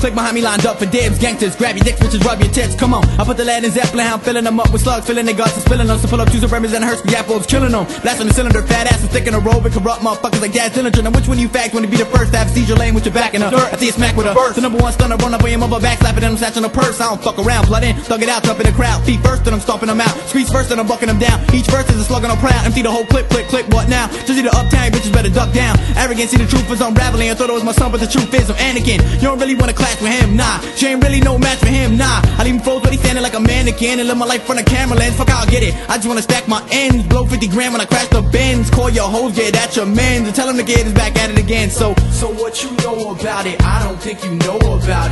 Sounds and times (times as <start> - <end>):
Music: 0.0 - 45.1.